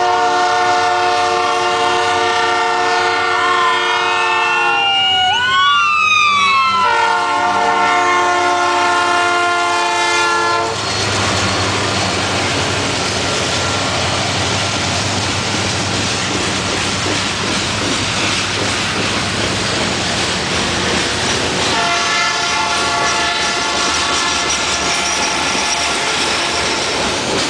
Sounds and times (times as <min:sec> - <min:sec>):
Train horn: 0:00.0 - 0:04.8, 0:06.8 - 0:10.8, 0:21.7 - 0:26.3
Railroad car, train wagon: 0:00.0 - 0:27.5
Clickety-clack: 0:14.7 - 0:22.1, 0:22.7 - 0:27.5.